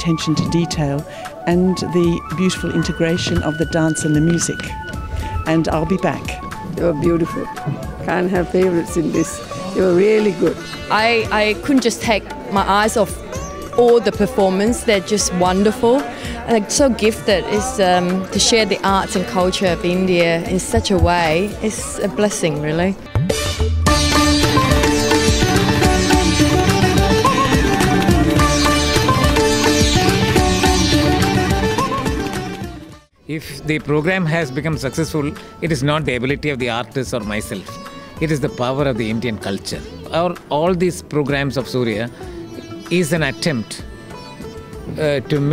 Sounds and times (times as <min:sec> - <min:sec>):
Speech: 0:00.0 - 0:04.7, 0:05.5 - 0:13.2, 0:13.8 - 0:23.0, 0:33.3 - 0:42.1, 0:42.9 - 0:43.8, 0:44.9 - 0:45.5
Carnatic music: 0:00.0 - 0:45.5
Sitar: 0:00.0 - 0:45.5.